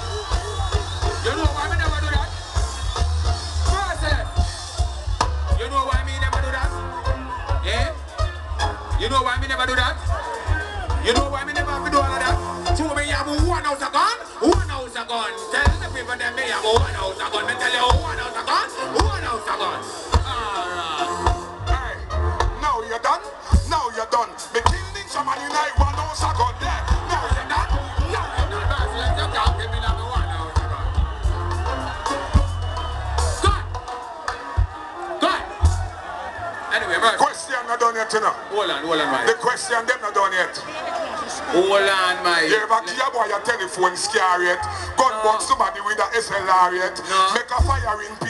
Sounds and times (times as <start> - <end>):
Music: 0.0 - 38.2, 42.9 - 48.3
Speech: 5.5 - 8.0, 8.9 - 30.9, 36.7 - 48.3.